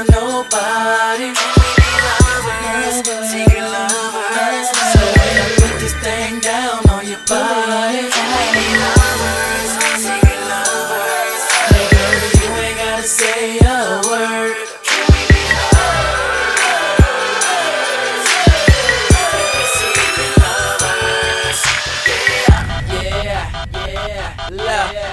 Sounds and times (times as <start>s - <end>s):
Music: 0.0s - 25.1s.